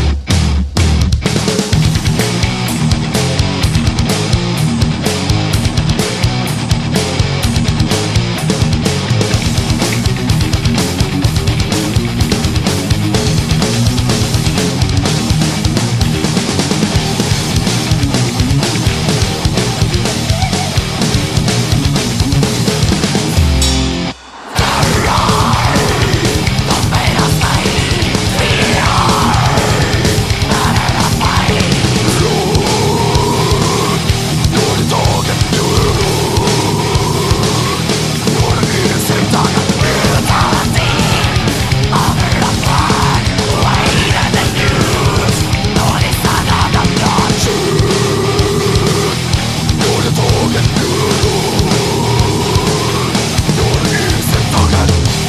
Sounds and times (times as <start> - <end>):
Music: 0.0 - 55.2.